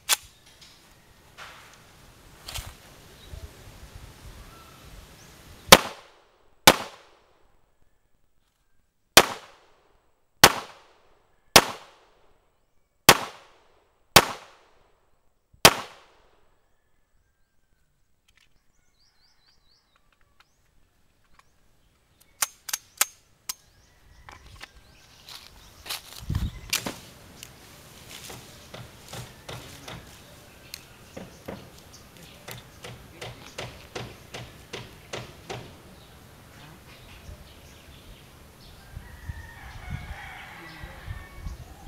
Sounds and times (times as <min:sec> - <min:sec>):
Gunshot, gunfire: 0:05.7 - 0:07.1, 0:09.2 - 0:09.7, 0:10.4 - 0:11.0, 0:11.6 - 0:12.0, 0:13.1 - 0:13.6, 0:14.2 - 0:14.6, 0:15.7 - 0:16.2.